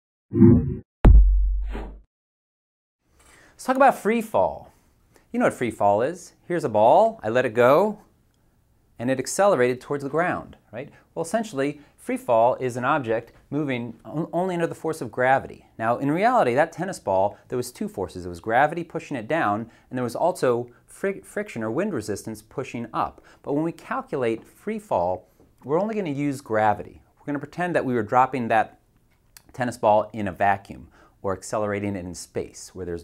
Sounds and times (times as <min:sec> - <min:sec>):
Speech: 0:03.6 - 0:04.7, 0:05.3 - 0:08.1, 0:09.0 - 0:28.8, 0:29.4 - 0:33.0.